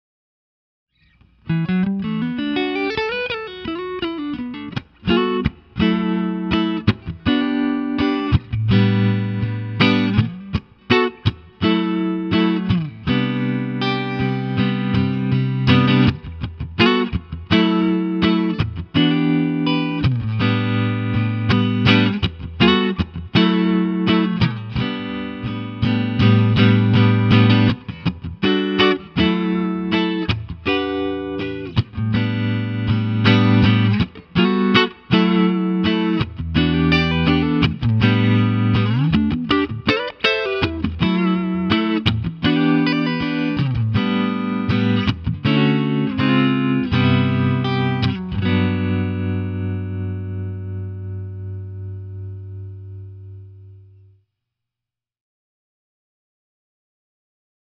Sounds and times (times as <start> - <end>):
Steel guitar, slide guitar: 1.5 - 53.8.